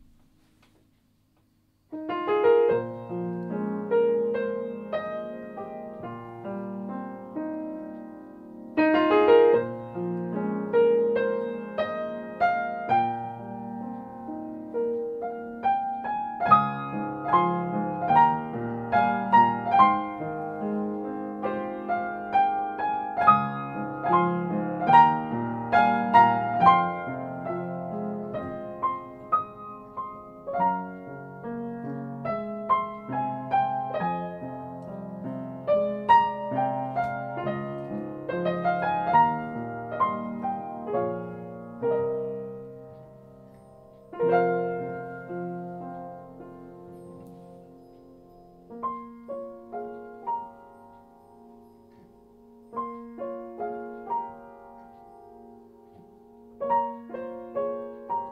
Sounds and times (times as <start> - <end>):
Music: 1.9 - 58.3.